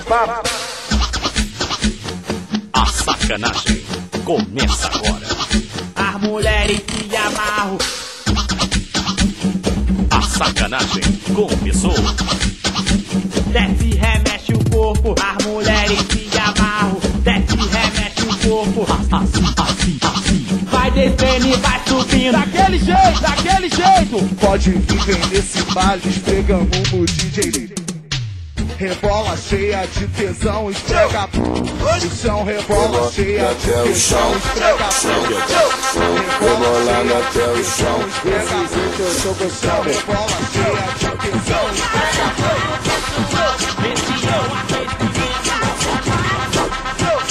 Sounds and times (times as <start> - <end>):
Scratching (performance technique): 0.1 - 47.3.